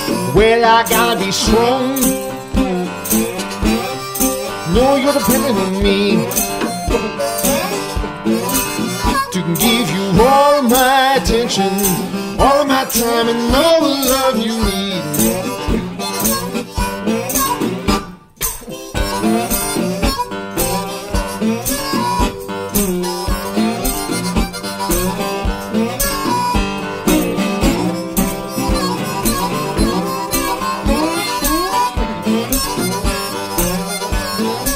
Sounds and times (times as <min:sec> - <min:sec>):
Harmonica: 0:00.0 - 0:34.7
Wind instrument, woodwind instrument: 0:00.0 - 0:34.7.